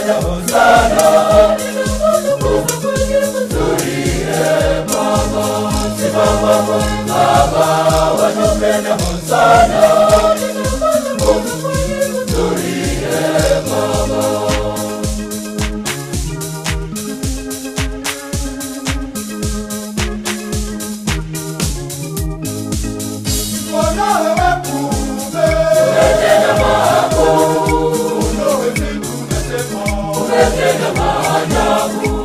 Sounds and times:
Choir: 0.0 - 15.4, 23.6 - 32.2
Gospel music: 0.0 - 32.2.

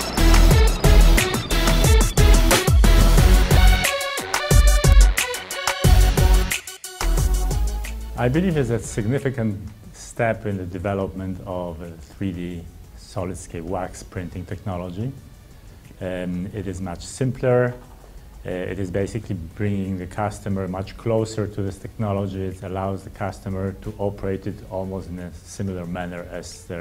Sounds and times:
Music: 0.0 - 26.8
Speech: 8.2 - 15.2, 16.0 - 17.8, 18.4 - 26.8.

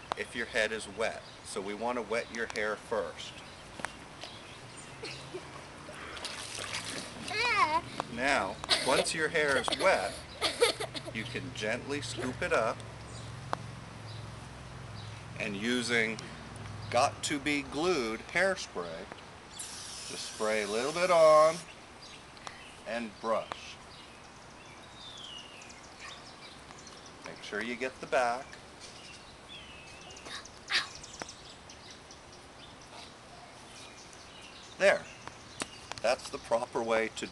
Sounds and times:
Spray: 19.6 - 21.7.

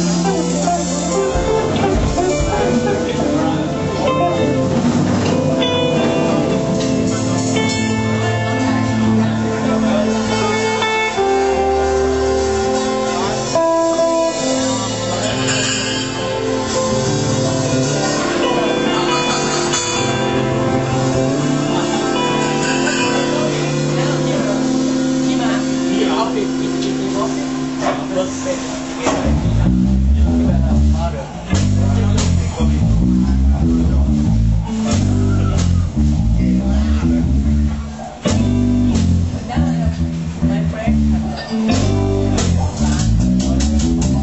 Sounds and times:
Music: 0.0 - 44.2
Speech: 0.0 - 44.2.

